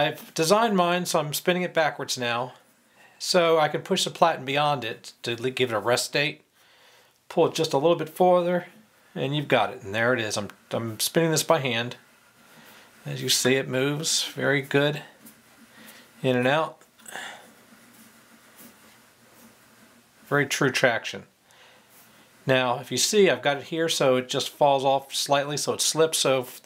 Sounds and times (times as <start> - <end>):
Speech: 0.0 - 2.6, 3.2 - 6.5, 7.3 - 12.0, 13.0 - 15.2, 16.2 - 16.8, 20.3 - 21.3, 22.4 - 26.6.